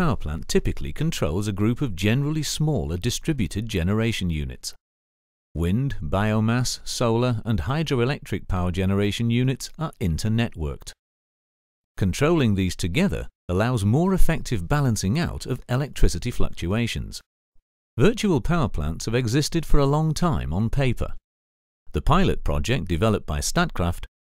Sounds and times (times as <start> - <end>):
Speech: 0.0 - 4.8, 5.6 - 11.0, 12.0 - 17.2, 18.0 - 21.2, 21.9 - 24.1.